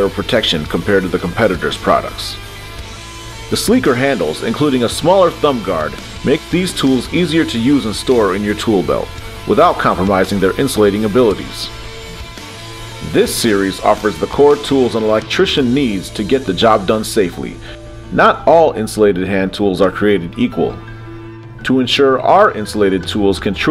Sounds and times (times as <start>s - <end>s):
Speech: 0.0s - 2.4s, 3.5s - 11.7s, 13.0s - 20.8s, 21.6s - 23.7s
Music: 0.0s - 23.7s.